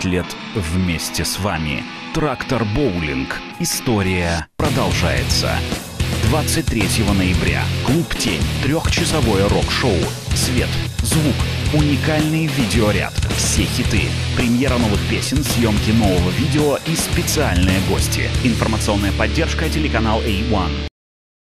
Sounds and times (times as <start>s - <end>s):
Heavy metal: 0.0s - 3.8s, 4.6s - 20.9s
Progressive rock: 0.0s - 3.8s, 4.6s - 20.1s
Rock and roll: 0.0s - 20.9s
Speech: 0.0s - 20.9s.